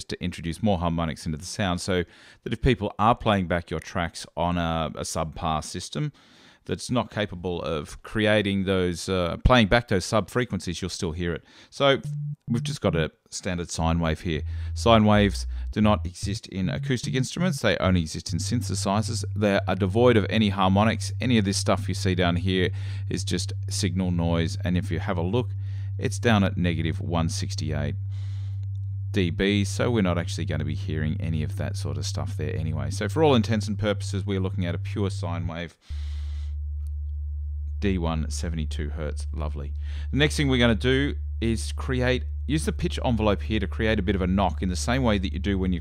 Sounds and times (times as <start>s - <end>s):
Speech: 0.0s - 28.0s, 29.2s - 35.8s, 37.8s - 45.8s.